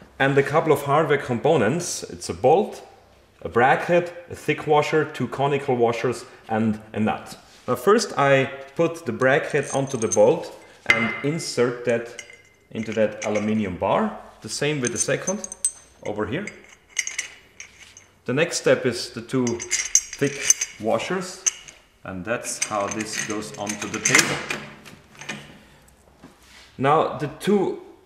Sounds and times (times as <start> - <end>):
Speech: 0.2 - 16.6, 18.3 - 21.5, 22.1 - 24.5, 26.8 - 28.0
Tools: 9.5 - 11.3, 12.1 - 13.6, 14.6 - 18.2, 19.5 - 21.8, 22.5 - 25.5.